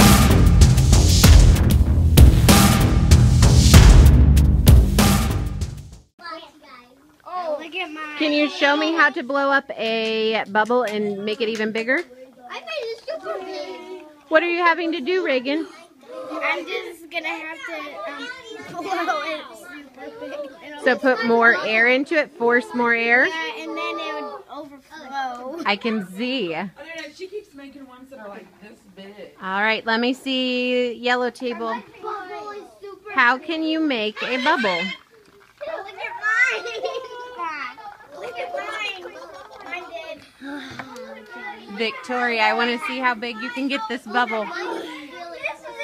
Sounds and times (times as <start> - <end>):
Child speech, kid speaking: 6.2 - 9.4, 10.2 - 29.4, 31.2 - 45.8.